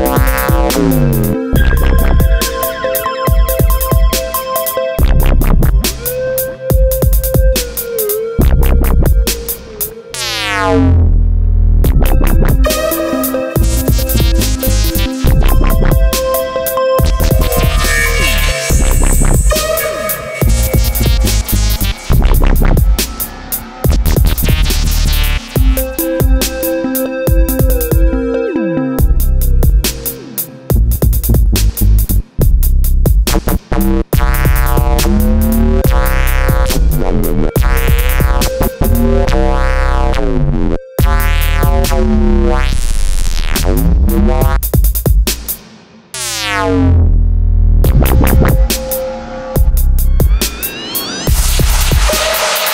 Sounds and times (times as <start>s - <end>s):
Synthesizer: 0.0s - 11.2s, 11.8s - 32.5s, 34.1s - 44.6s, 47.9s - 52.7s
Dubstep: 0.0s - 47.2s, 47.8s - 52.7s.